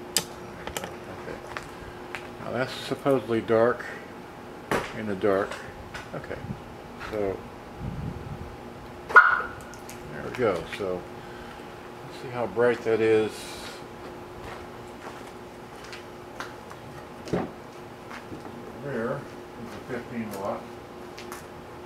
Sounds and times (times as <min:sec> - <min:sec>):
Speech: 0:02.4 - 0:04.0, 0:04.9 - 0:07.4, 0:10.1 - 0:11.1, 0:12.0 - 0:13.8, 0:18.8 - 0:20.7
Vehicle: 0:04.7 - 0:21.8.